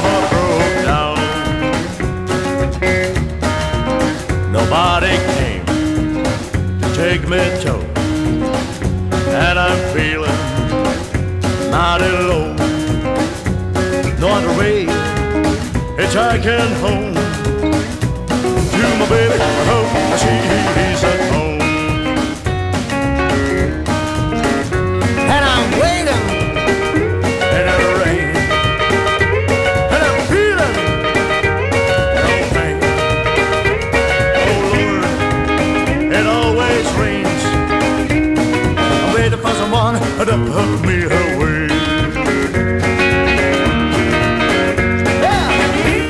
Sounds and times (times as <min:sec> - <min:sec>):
Music: 0:00.0 - 0:46.1.